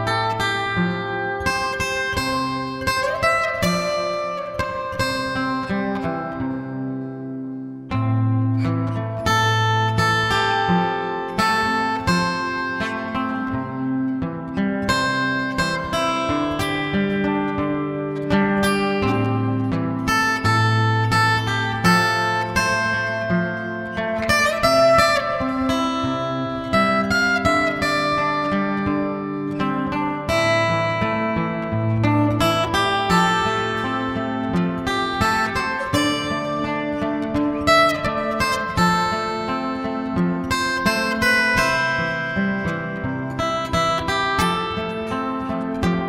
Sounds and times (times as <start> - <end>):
Acoustic guitar: 0.0 - 46.0
Strum: 0.0 - 46.0.